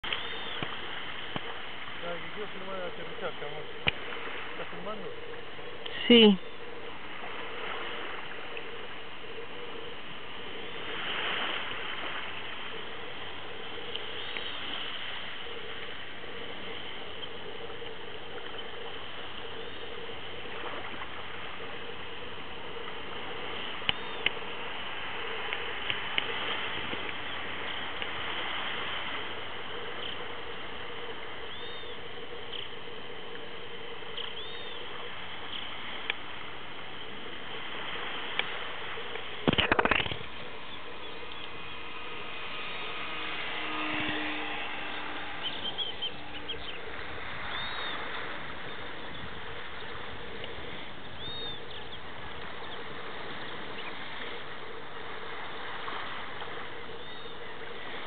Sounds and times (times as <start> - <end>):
Aircraft: 0.0 - 58.0
Speech: 2.0 - 3.7.